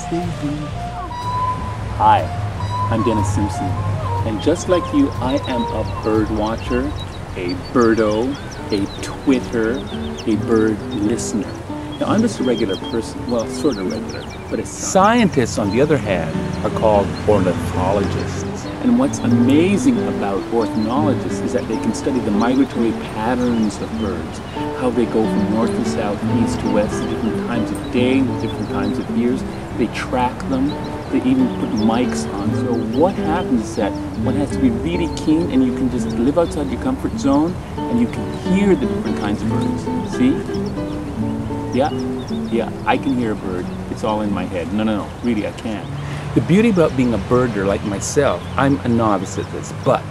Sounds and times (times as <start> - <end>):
Speech: 0.0 - 0.7, 2.0 - 3.7, 4.3 - 40.5, 41.8 - 50.1
Music: 0.0 - 50.1.